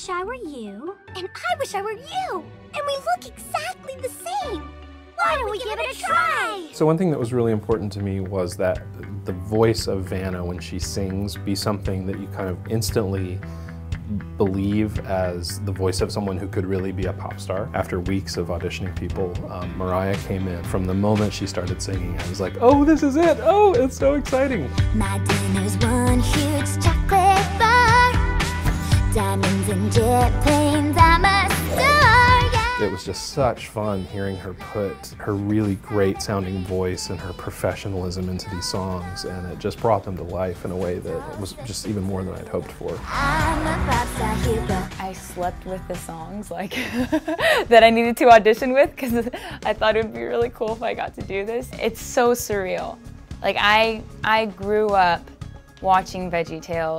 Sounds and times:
Music: 0.0s - 56.9s
Speech: 5.2s - 13.4s, 14.1s - 24.7s, 32.8s - 43.0s.

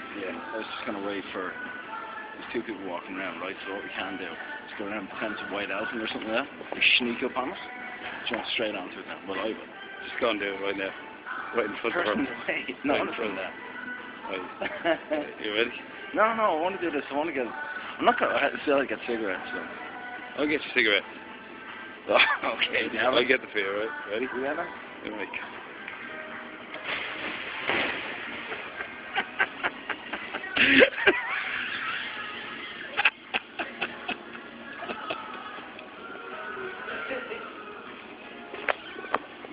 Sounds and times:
Inside, public space: 0.0s - 39.5s
Music: 0.0s - 39.5s.

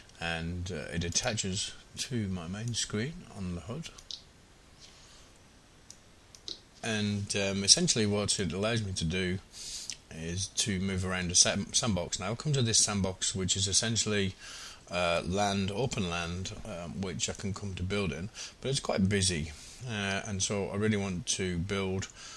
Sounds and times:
Speech: 0.2s - 4.0s, 6.8s - 9.4s, 10.1s - 22.1s.

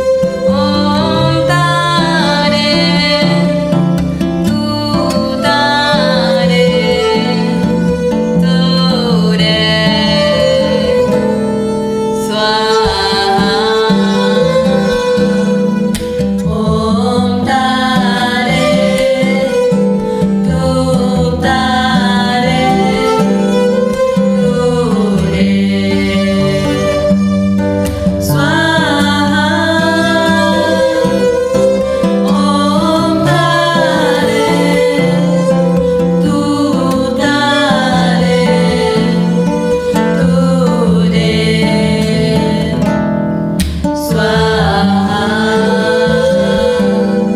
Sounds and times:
Mantra: 0.0s - 3.7s, 4.5s - 11.1s, 12.2s - 15.7s, 16.4s - 23.4s, 24.2s - 27.1s, 28.2s - 31.4s, 32.2s - 43.0s, 44.0s - 47.3s.

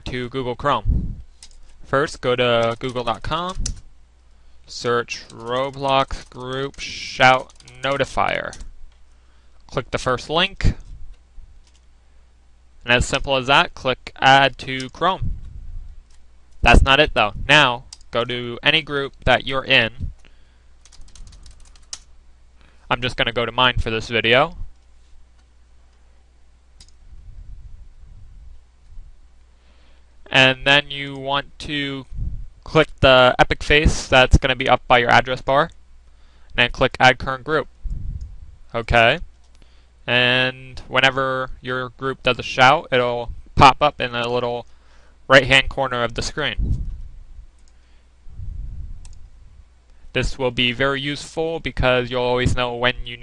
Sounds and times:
Speech: 0.0s - 0.9s, 1.9s - 3.6s, 4.7s - 8.6s, 9.7s - 10.8s, 12.8s - 15.3s, 16.6s - 20.0s, 22.9s - 24.6s, 30.3s - 32.1s, 32.7s - 35.8s, 36.6s - 37.7s, 38.7s - 39.3s, 40.1s - 44.7s, 45.3s - 46.6s, 50.2s - 53.2s.

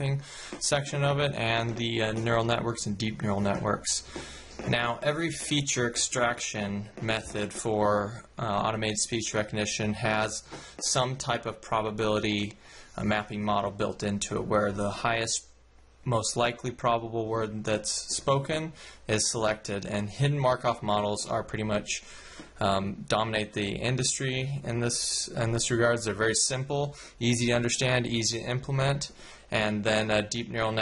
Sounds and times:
Male speech, man speaking: 0.0s - 15.5s, 16.1s - 22.0s, 22.6s - 30.8s.

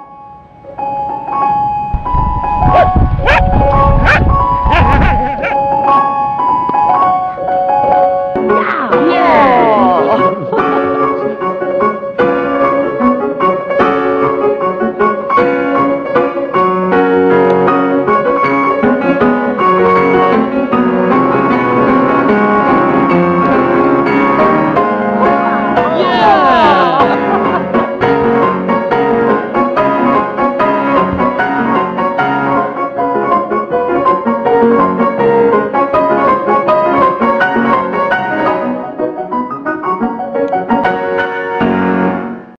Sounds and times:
Music: 0.0s - 42.5s.

